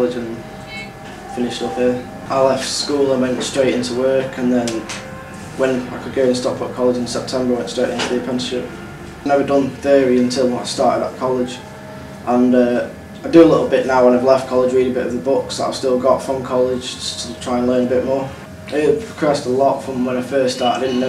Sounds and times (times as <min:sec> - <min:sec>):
Speech: 0:00.0 - 0:04.9, 0:05.6 - 0:11.6, 0:12.3 - 0:21.0.